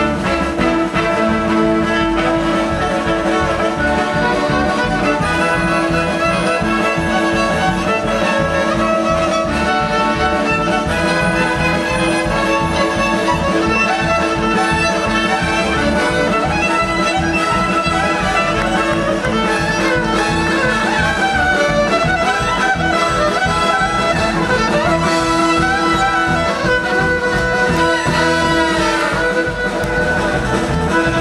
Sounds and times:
Violin, fiddle: 0.0s - 31.2s.

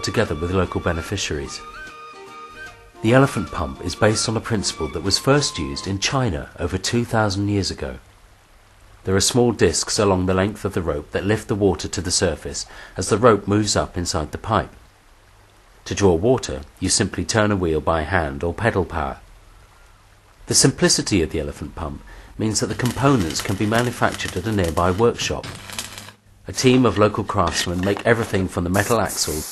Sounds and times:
Speech: 0.0s - 1.6s, 3.0s - 8.0s, 9.0s - 14.8s, 15.8s - 19.2s, 20.5s - 25.6s, 26.5s - 29.5s.

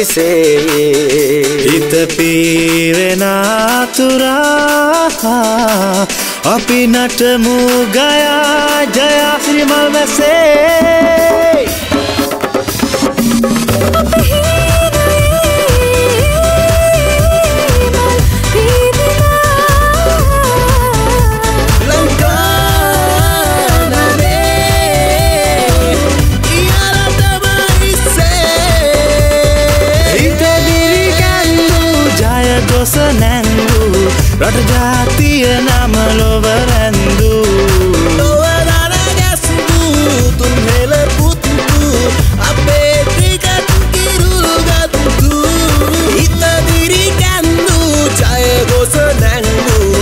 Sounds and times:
Music of Asia: 0.0s - 50.0s
Song: 0.0s - 50.0s.

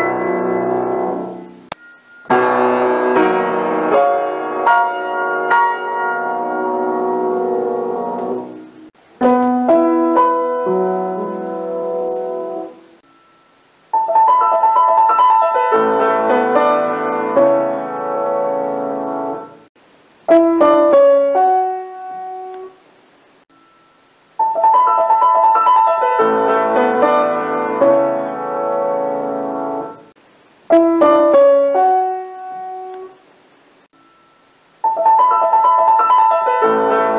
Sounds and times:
Music: 0.0s - 19.7s, 20.3s - 22.8s, 23.5s - 30.1s, 30.7s - 33.2s, 34.0s - 37.1s.

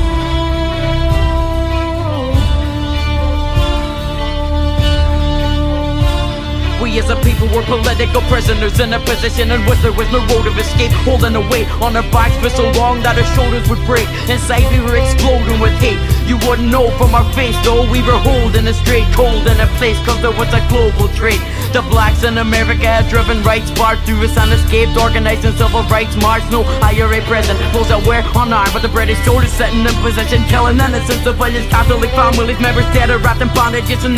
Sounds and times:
Exciting music: 0.0s - 34.1s
Rhythm and blues: 0.0s - 34.1s.

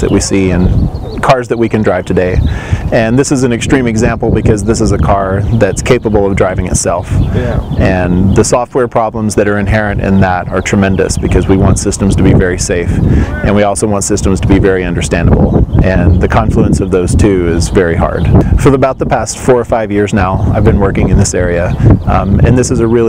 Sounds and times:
Speech: 0.0s - 23.0s.

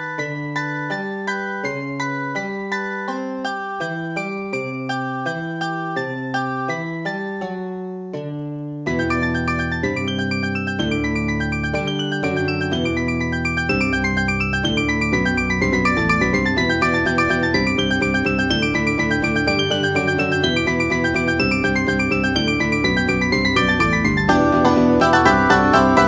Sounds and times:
Video game music: 0.0s - 26.0s.

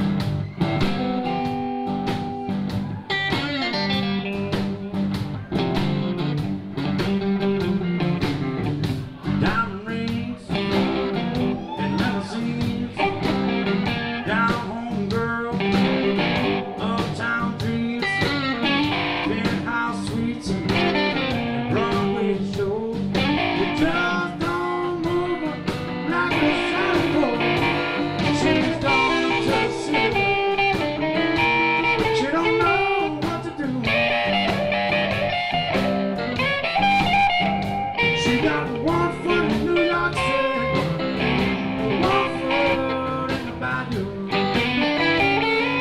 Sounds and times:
Music: 0.0s - 45.8s.

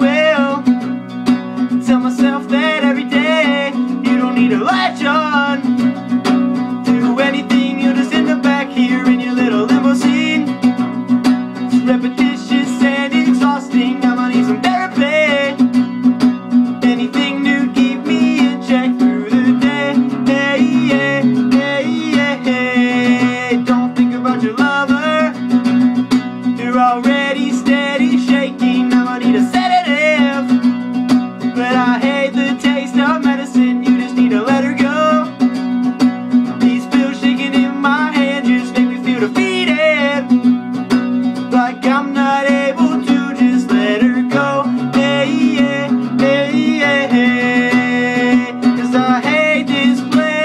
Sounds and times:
Acoustic guitar: 0.0s - 50.4s
Strum: 0.0s - 50.4s.

